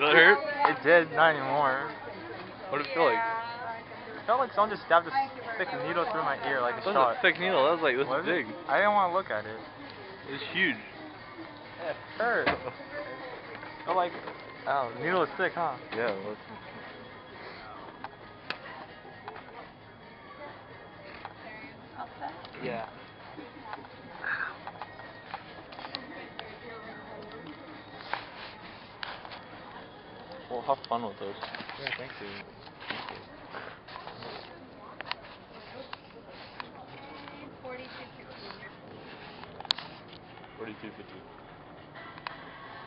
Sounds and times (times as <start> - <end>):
Inside, public space: 0.0 - 42.8.